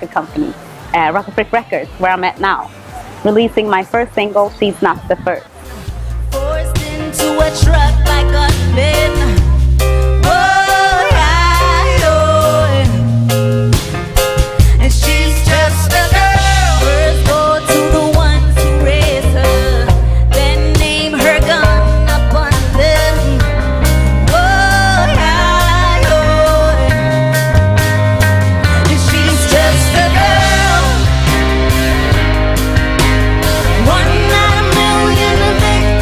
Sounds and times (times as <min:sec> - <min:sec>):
Music: 0:00.0 - 0:36.0
Singing: 0:05.7 - 0:13.1, 0:14.8 - 0:23.5, 0:24.3 - 0:27.4, 0:28.8 - 0:31.4, 0:33.7 - 0:36.0.